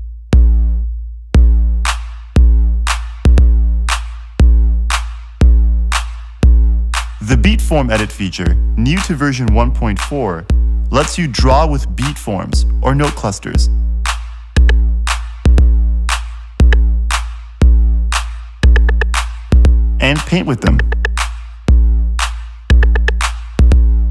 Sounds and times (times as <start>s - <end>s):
Music: 0.0s - 24.1s
Speech: 7.2s - 13.8s, 20.0s - 20.9s.